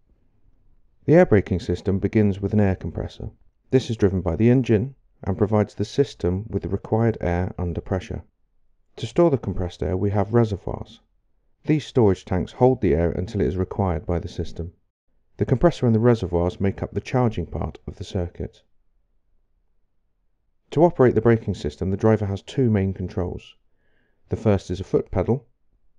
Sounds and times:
Speech: 0:01.0 - 0:08.3, 0:09.0 - 0:11.0, 0:11.7 - 0:14.8, 0:15.4 - 0:18.7, 0:20.7 - 0:23.6, 0:24.3 - 0:25.5.

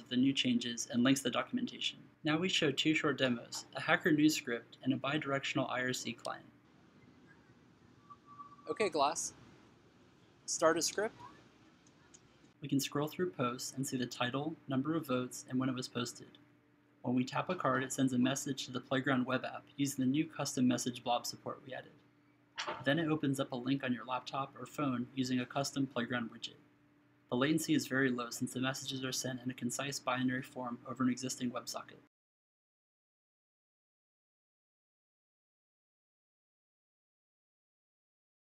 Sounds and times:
Speech: 0:00.0 - 0:06.5, 0:08.7 - 0:09.3, 0:10.5 - 0:11.3, 0:12.6 - 0:16.4, 0:17.0 - 0:22.0, 0:22.7 - 0:26.6, 0:27.3 - 0:32.1.

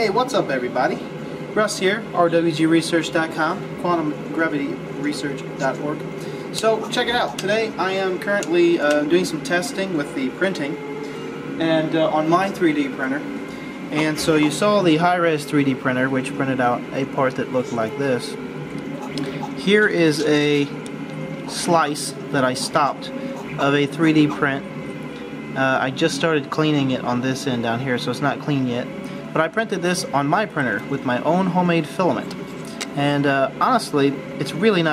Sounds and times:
Speech: 0:00.0 - 0:01.0, 0:01.6 - 0:10.8, 0:11.6 - 0:13.3, 0:13.9 - 0:18.4, 0:19.6 - 0:20.8, 0:21.5 - 0:24.7, 0:25.6 - 0:32.4, 0:33.0 - 0:34.9.

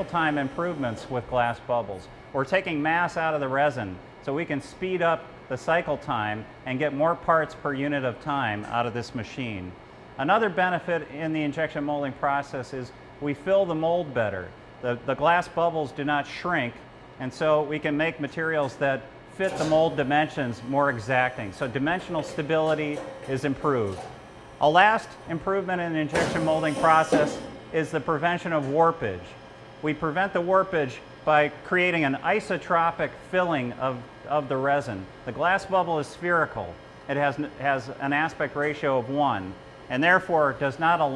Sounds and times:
Speech: 0:00.0 - 0:41.1.

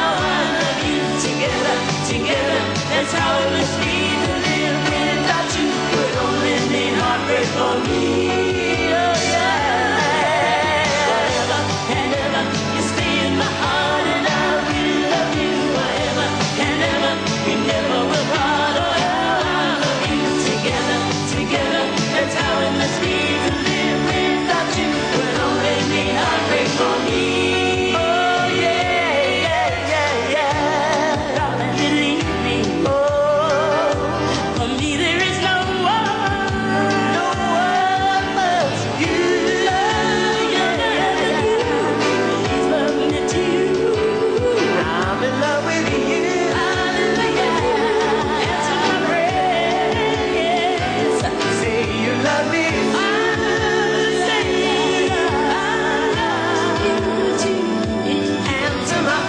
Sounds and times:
Pop music: 0:00.0 - 0:59.2
Singing: 0:00.0 - 0:59.2.

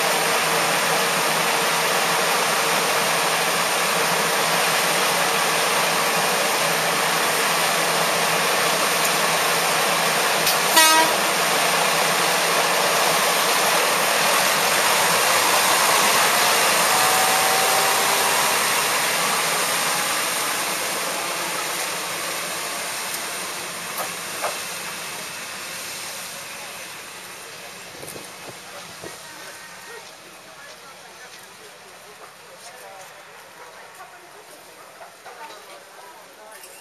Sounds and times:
Train: 0:00.0 - 0:36.8
Speech: 0:29.0 - 0:36.8.

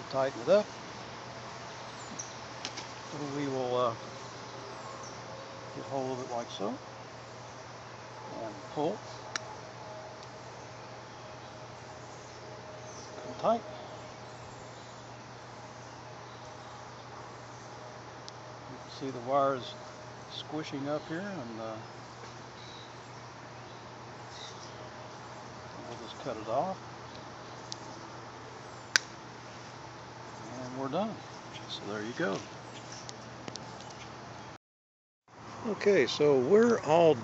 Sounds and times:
Speech: 0:00.0 - 0:00.7, 0:03.1 - 0:04.0, 0:05.8 - 0:06.8, 0:08.3 - 0:09.0, 0:13.2 - 0:13.7, 0:18.7 - 0:21.8, 0:25.8 - 0:26.8, 0:30.5 - 0:32.5, 0:35.6 - 0:37.2.

